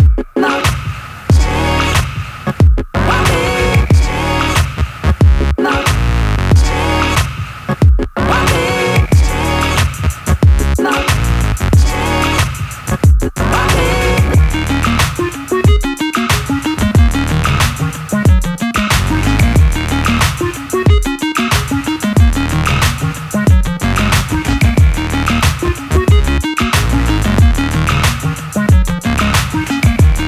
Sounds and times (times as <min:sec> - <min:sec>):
Music: 0:00.0 - 0:30.2.